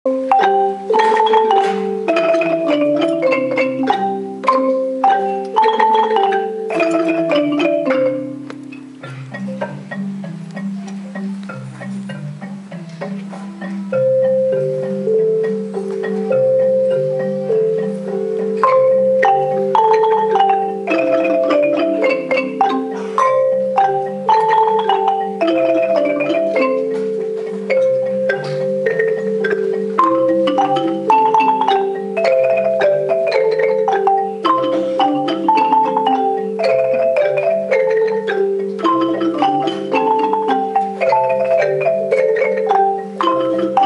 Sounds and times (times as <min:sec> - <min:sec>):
Marimba, xylophone: 0:00.0 - 0:43.8
Glockenspiel: 0:00.1 - 0:43.8.